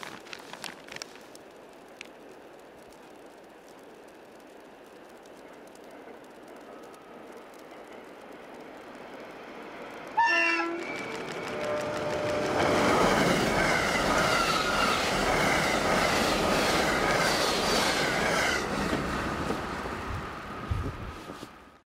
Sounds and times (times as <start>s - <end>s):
Train: 0.0s - 21.8s.